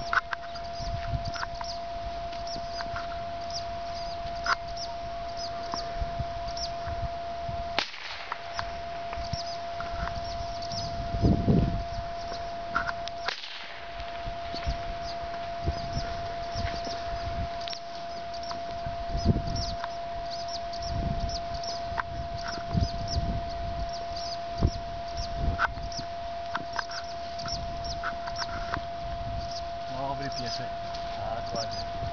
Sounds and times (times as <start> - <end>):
Animal: 0.0 - 7.1, 8.5 - 13.4, 14.3 - 32.1.